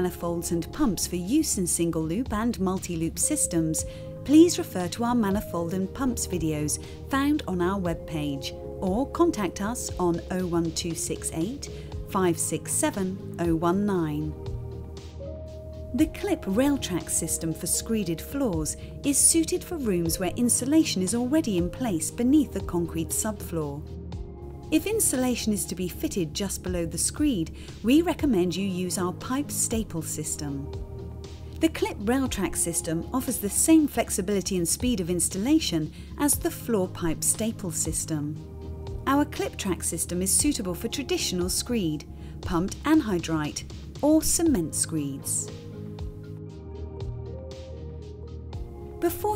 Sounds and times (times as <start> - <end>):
Speech: 0.0 - 14.4, 16.0 - 23.8, 24.8 - 30.7, 31.6 - 38.4, 39.1 - 45.6, 49.0 - 49.3
Music: 0.0 - 49.3.